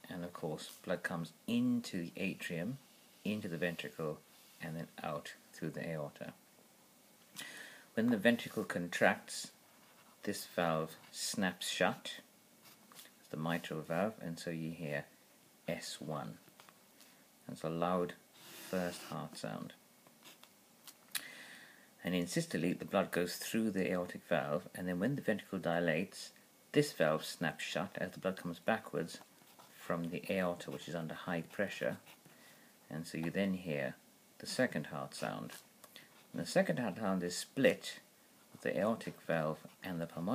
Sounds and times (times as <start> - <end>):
Speech: 0.0 - 6.4, 8.0 - 9.6, 10.2 - 12.3, 13.3 - 15.1, 15.7 - 16.5, 17.4 - 19.8, 22.0 - 32.1, 32.9 - 35.7, 36.3 - 40.3.